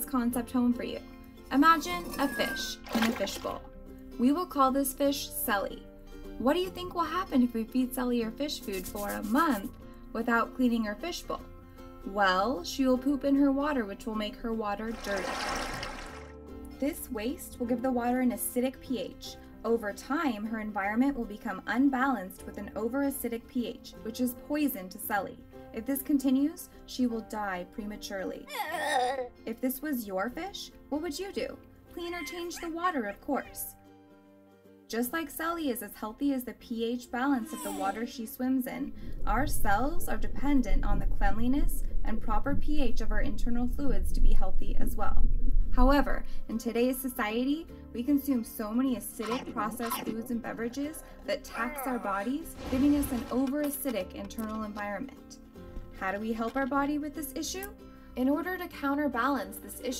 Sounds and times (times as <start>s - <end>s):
Speech: 0.0s - 5.8s, 6.4s - 11.4s, 12.1s - 15.2s, 16.8s - 28.4s, 29.5s - 33.7s, 34.9s - 45.2s, 45.8s - 55.4s, 56.0s - 59.9s
Music: 0.0s - 59.9s.